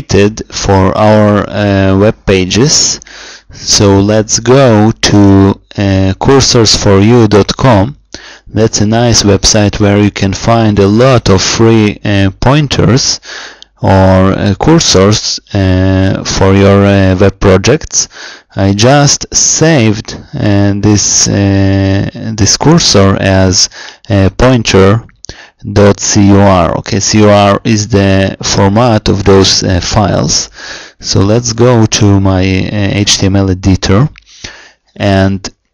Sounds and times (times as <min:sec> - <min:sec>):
Speech: 0:00.0 - 0:13.2, 0:13.8 - 0:35.6.